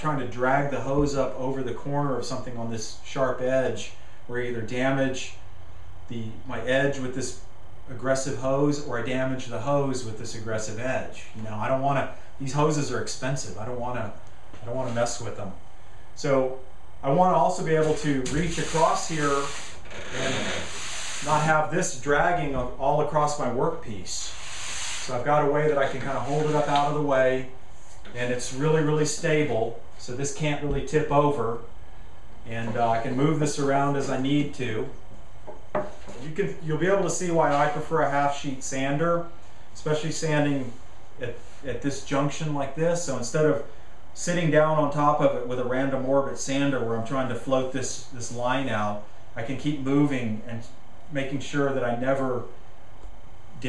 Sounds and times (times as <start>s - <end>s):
Speech: 0.0s - 5.4s, 6.1s - 15.6s, 16.2s - 20.6s, 21.2s - 24.4s, 25.0s - 31.7s, 32.4s - 35.0s, 36.2s - 52.6s.